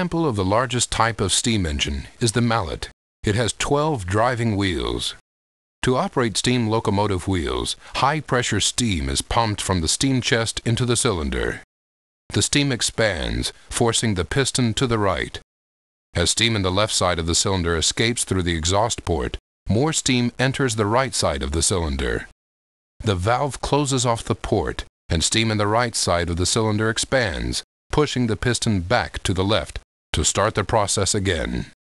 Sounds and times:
Speech: 0.0s - 5.2s, 5.8s - 11.7s, 12.3s - 15.4s, 16.2s - 22.4s, 23.0s - 31.8s.

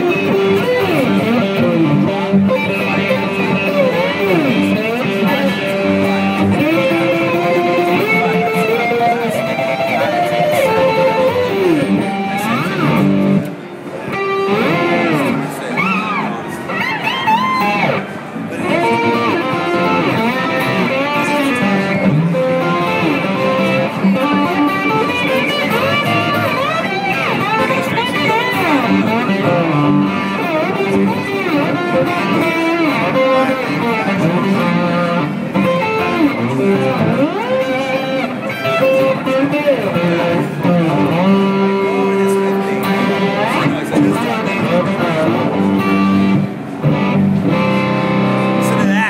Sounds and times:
Electric guitar: 0.0s - 49.0s
Speech: 0.9s - 13.0s, 14.6s - 16.8s, 18.4s - 19.6s, 20.6s - 29.6s, 32.9s - 35.3s, 40.6s - 45.7s, 48.6s - 49.0s.

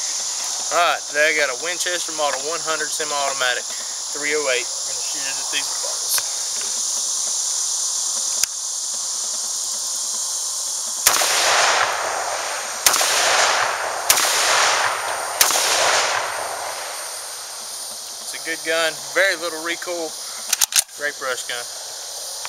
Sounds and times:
Outside, rural or natural: 0.0s - 22.4s.

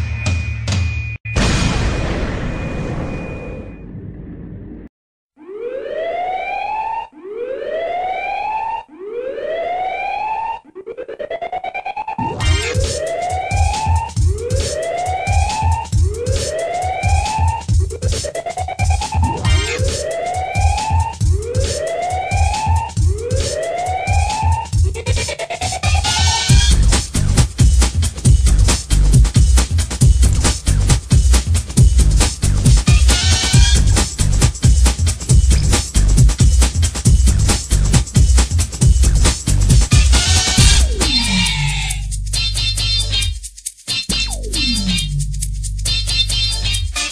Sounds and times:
Music: 0.0s - 1.2s, 12.3s - 47.1s.

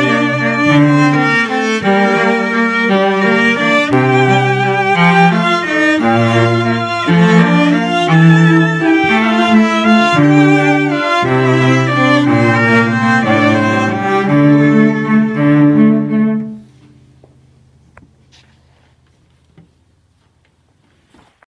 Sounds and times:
Cello: 0.0s - 17.0s.

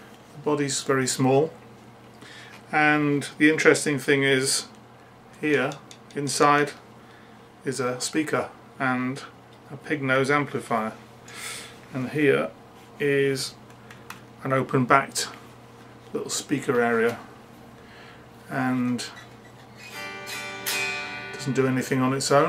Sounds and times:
Speech: 0.4s - 1.6s, 2.7s - 4.8s, 5.4s - 6.8s, 7.6s - 11.0s, 11.9s - 13.6s, 14.4s - 15.4s, 16.1s - 17.3s, 18.5s - 19.2s, 21.4s - 22.4s.

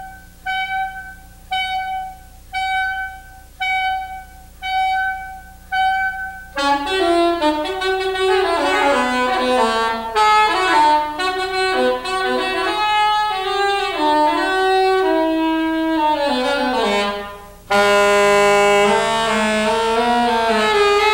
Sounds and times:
Jazz: 0.0s - 21.1s.

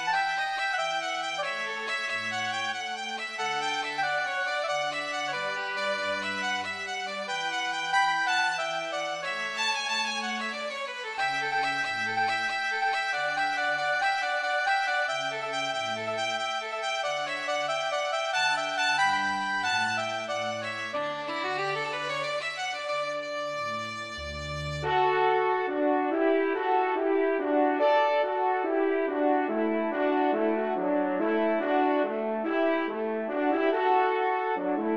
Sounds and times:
Trumpet: 0.0s - 34.9s.

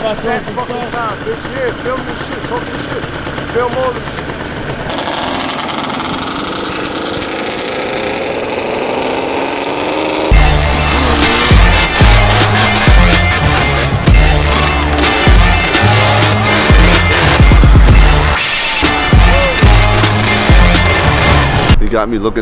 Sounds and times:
Speech: 0.0s - 4.2s, 21.8s - 22.4s
Outside, urban or manmade: 0.0s - 22.4s.

